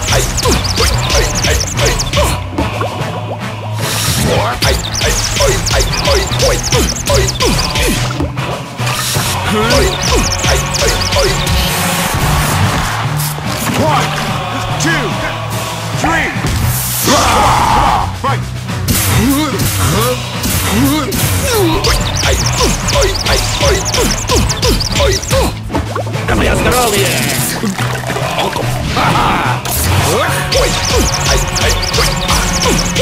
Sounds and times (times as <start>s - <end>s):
Music: 0.0s - 33.0s
Speech: 13.6s - 15.4s, 16.0s - 16.4s, 17.0s - 18.4s, 19.1s - 21.9s, 26.3s - 27.6s.